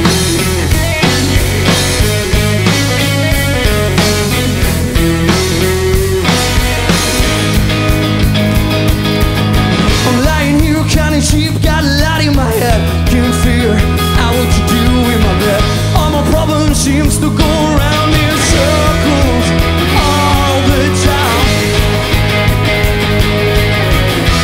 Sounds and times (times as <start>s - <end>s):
Music: 0.0s - 24.4s
Speech: 10.0s - 21.6s.